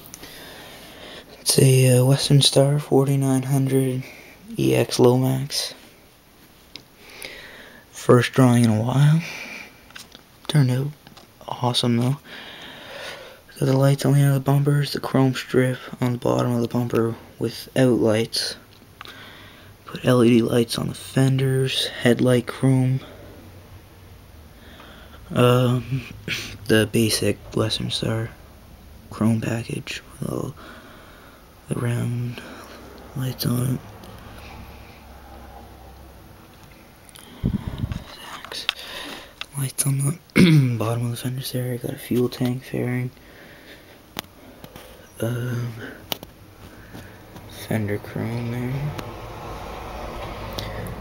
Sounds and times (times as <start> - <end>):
Speech: 1.4 - 5.8, 8.0 - 9.4, 10.5 - 12.2, 13.5 - 18.6, 19.9 - 23.1, 25.3 - 28.4, 29.1 - 30.6, 31.7 - 33.8, 39.5 - 43.2, 45.2 - 46.0, 47.5 - 49.0.